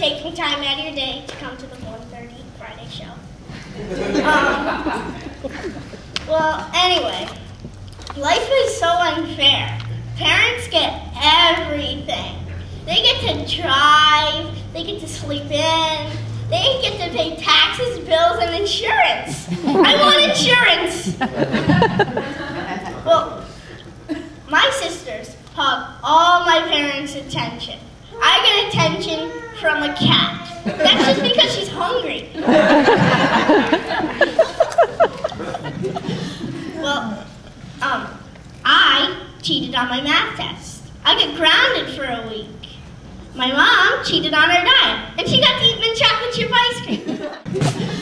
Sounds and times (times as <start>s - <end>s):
Child speech, kid speaking: 0.0s - 3.3s, 6.2s - 7.5s, 8.2s - 21.2s, 23.0s - 23.5s, 24.5s - 32.4s, 36.7s - 42.8s, 43.4s - 47.1s.